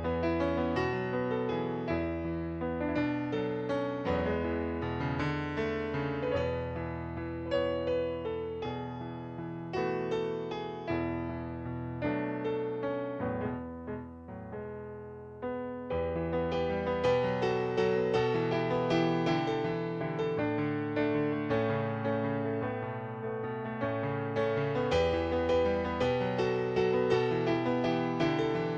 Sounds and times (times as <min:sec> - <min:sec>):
Music: 0:00.0 - 0:28.7.